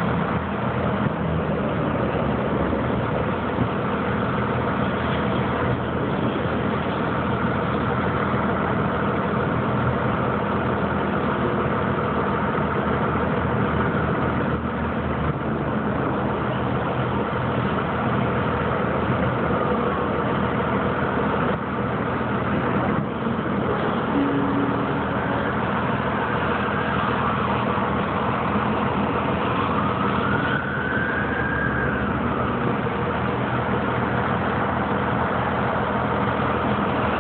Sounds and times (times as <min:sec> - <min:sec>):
Vehicle: 0:00.0 - 0:37.2.